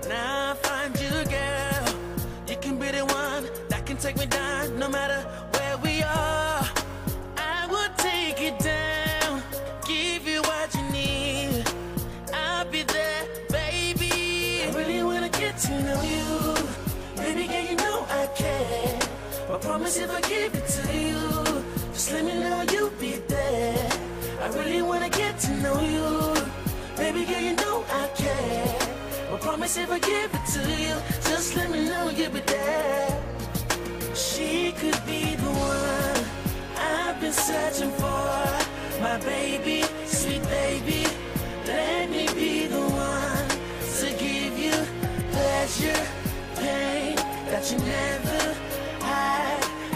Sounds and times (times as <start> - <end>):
Music: 0.0 - 49.9.